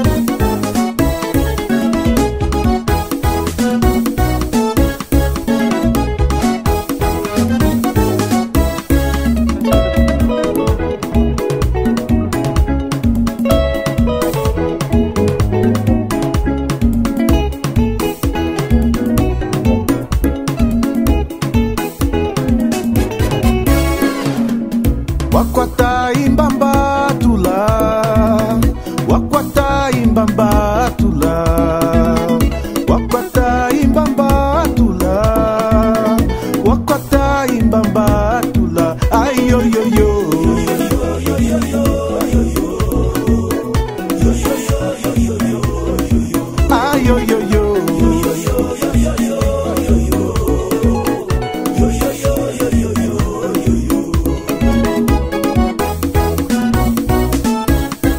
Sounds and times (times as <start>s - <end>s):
Funk: 0.0s - 58.1s.